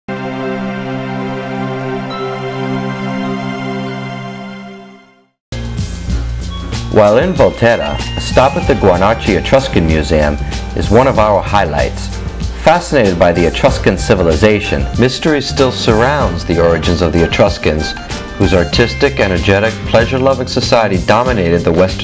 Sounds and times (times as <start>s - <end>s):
Background music: 0.1s - 22.0s.